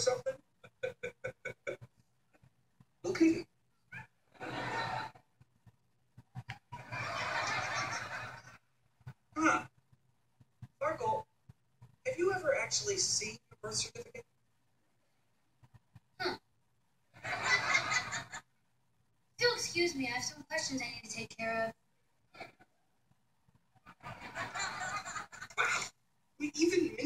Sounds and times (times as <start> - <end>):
Inside, small room: 0.0 - 27.0.